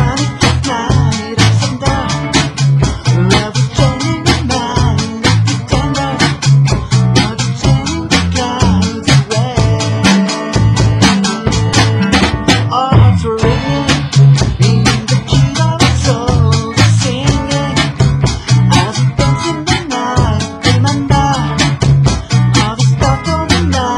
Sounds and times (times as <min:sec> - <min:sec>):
Music: 0:00.0 - 0:23.9.